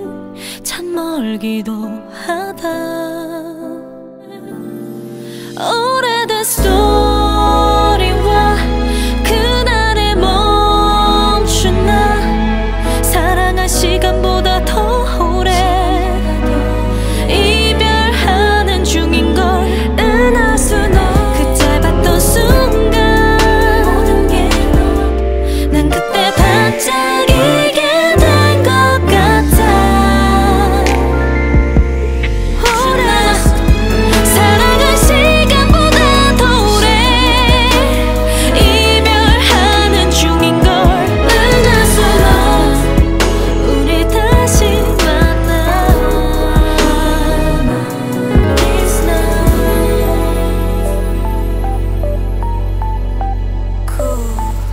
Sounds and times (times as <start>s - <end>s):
Female singing: 0.0s - 5.0s, 5.6s - 31.3s, 32.6s - 51.6s, 53.9s - 54.7s
Music: 0.0s - 54.7s.